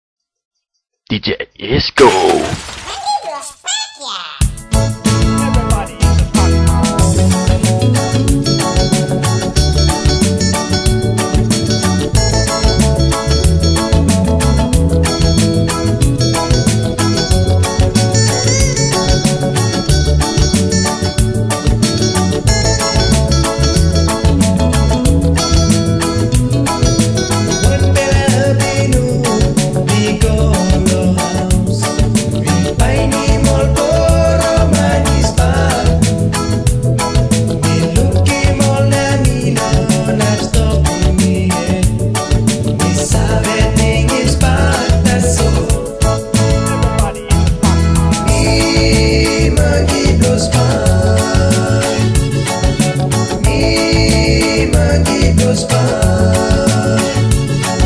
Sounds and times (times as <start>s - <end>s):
Speech: 1.1s - 4.4s, 5.4s - 6.0s
Music: 4.4s - 57.8s.